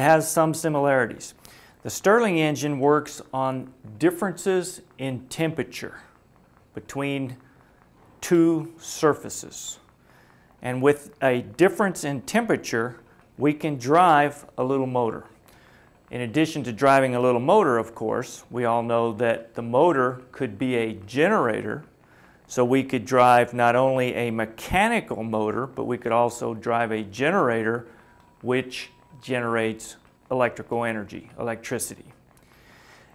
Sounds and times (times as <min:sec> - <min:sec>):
Speech: 0:00.0 - 0:07.4, 0:08.2 - 0:09.9, 0:10.6 - 0:15.4, 0:16.1 - 0:21.9, 0:22.5 - 0:32.2.